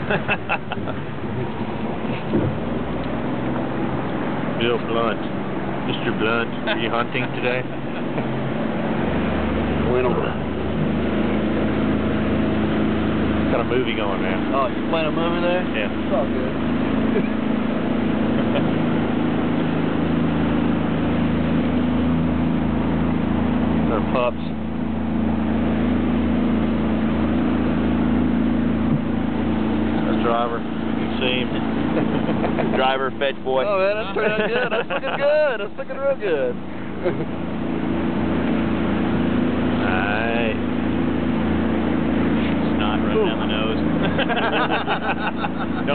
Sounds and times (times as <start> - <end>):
Boat, Water vehicle: 0.0 - 45.9
Speech: 4.6 - 5.2, 5.9 - 7.7, 9.9 - 10.4, 13.5 - 16.5, 23.9 - 24.6, 30.0 - 31.6, 32.6 - 36.6, 39.8 - 40.6, 42.6 - 43.8.